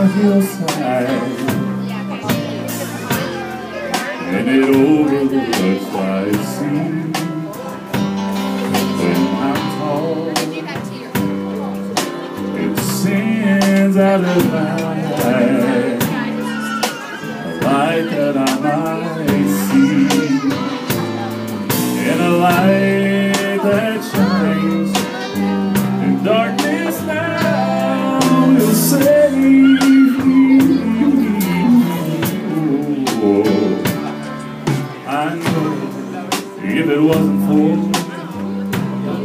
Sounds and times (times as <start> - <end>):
Music: 0.0 - 39.2.